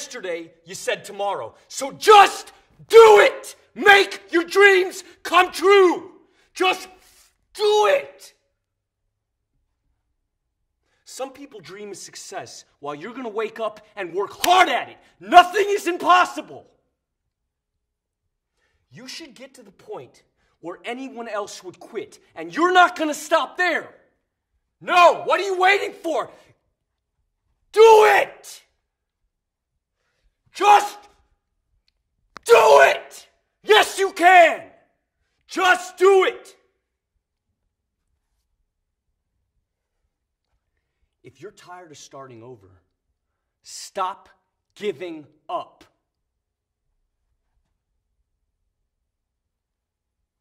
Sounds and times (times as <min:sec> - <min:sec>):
Male speech, man speaking: 0:00.0 - 0:07.0, 0:07.6 - 0:08.4, 0:11.1 - 0:16.7, 0:18.9 - 0:24.0, 0:24.8 - 0:26.5, 0:27.8 - 0:28.7, 0:30.6 - 0:31.1, 0:32.5 - 0:34.7, 0:35.5 - 0:36.6, 0:41.3 - 0:42.9, 0:43.6 - 0:46.0
Narration, monologue: 0:00.0 - 0:48.5.